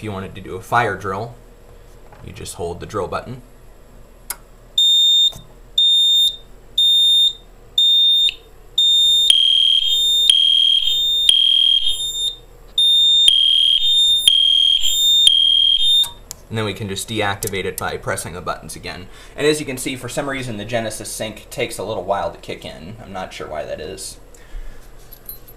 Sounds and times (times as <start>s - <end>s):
Fire alarm: 4.8s - 16.2s.